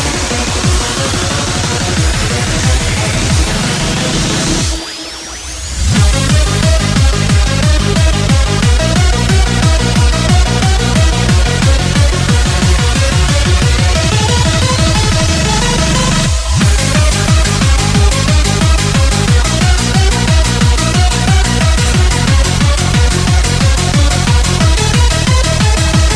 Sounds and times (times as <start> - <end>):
Techno: 0.0 - 26.1.